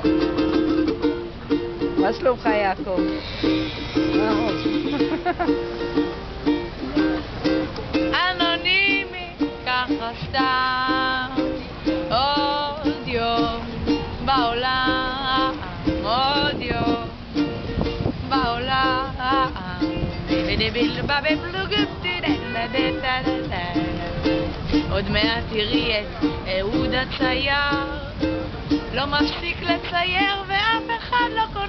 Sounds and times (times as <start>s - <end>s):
Music: 0.0s - 31.6s
Female singing: 8.1s - 17.2s, 18.3s - 28.3s, 28.9s - 31.6s.